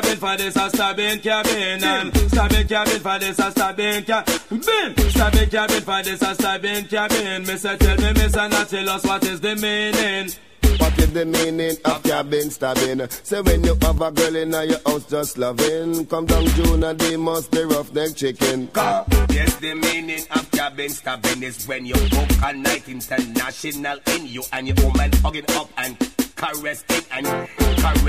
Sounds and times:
Music: 0.0s - 28.0s.

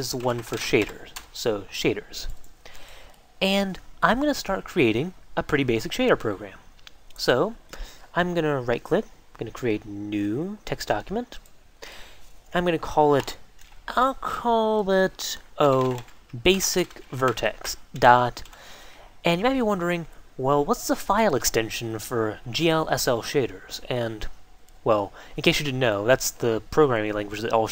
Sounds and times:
Speech: 0.0s - 2.4s, 3.4s - 11.4s, 12.5s - 18.5s, 19.2s - 27.7s.

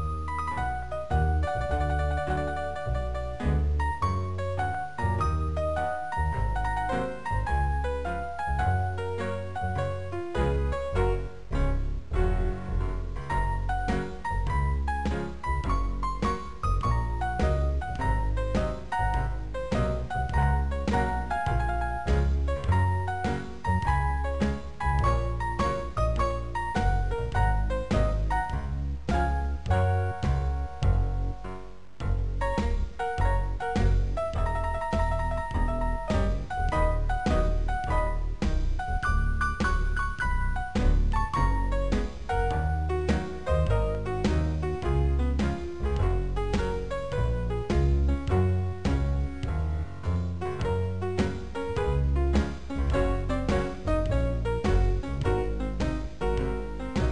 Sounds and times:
Music: 0.0s - 57.1s.

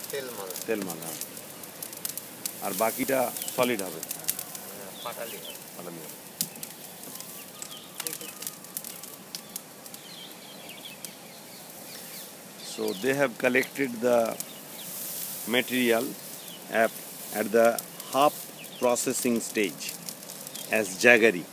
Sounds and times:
Outside, rural or natural: 0.0s - 21.5s
Speech: 0.1s - 1.2s, 2.6s - 4.1s, 12.7s - 14.4s, 15.5s - 20.0s, 20.7s - 21.5s
Bird: 3.0s - 21.3s.

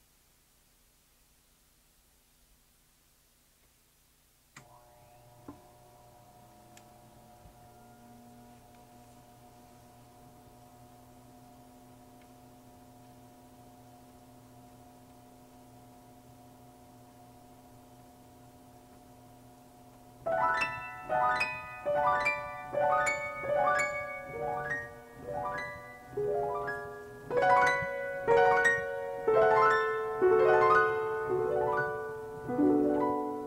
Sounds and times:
Music: 20.3s - 33.4s.

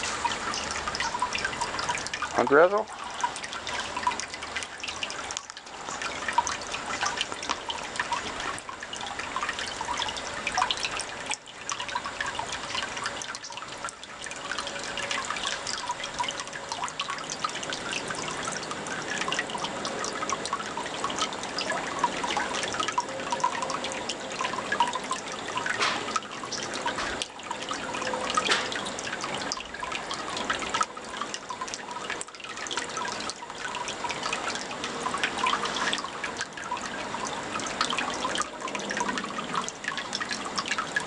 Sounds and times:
Speech: 2.4s - 2.9s.

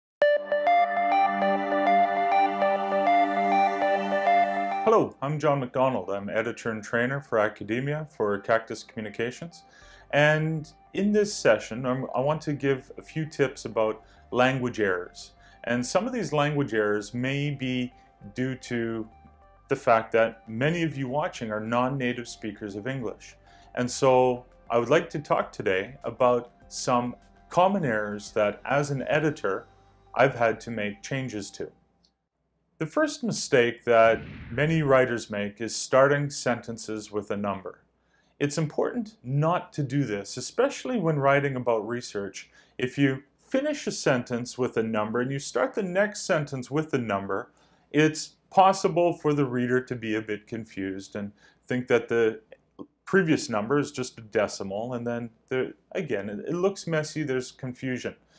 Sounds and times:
Music: 0.2s - 5.1s, 8.3s - 31.7s
Speech: 4.9s - 19.1s, 19.7s - 29.6s, 30.2s - 31.7s, 32.8s - 37.8s, 38.4s - 58.2s.

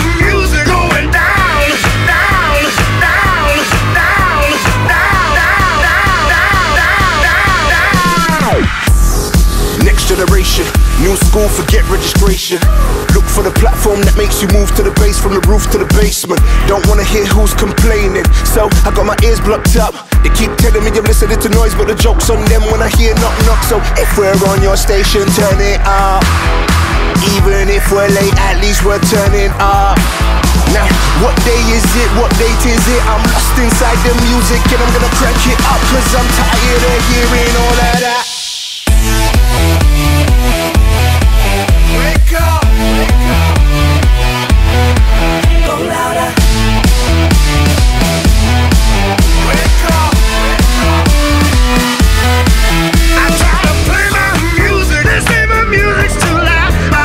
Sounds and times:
Music: 0.0s - 57.0s.

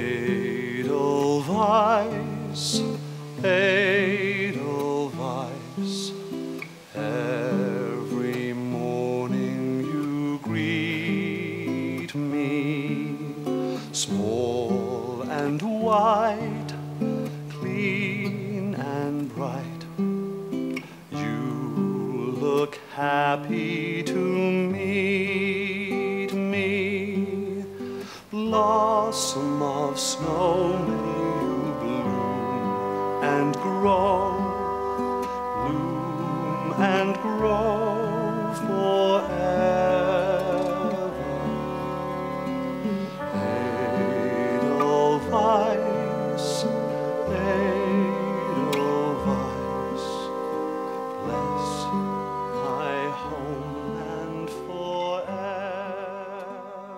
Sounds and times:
Classical music: 0.0s - 56.9s.

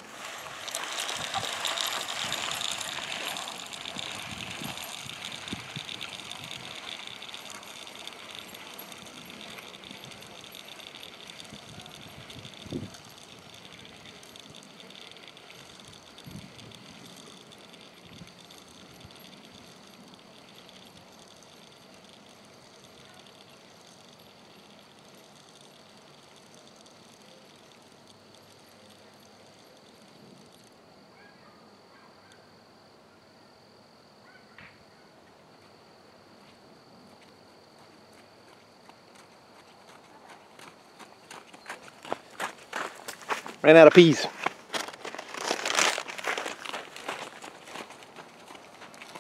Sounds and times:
Outside, rural or natural: 0.0s - 49.2s
Speech: 43.6s - 44.4s.

